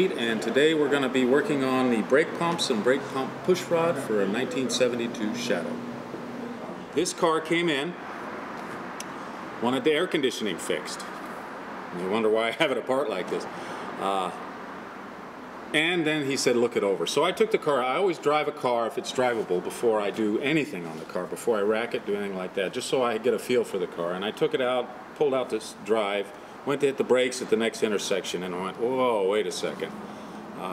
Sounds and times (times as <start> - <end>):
Speech: 0.0 - 5.8, 7.0 - 8.0, 9.6 - 11.1, 11.9 - 14.4, 15.8 - 30.0.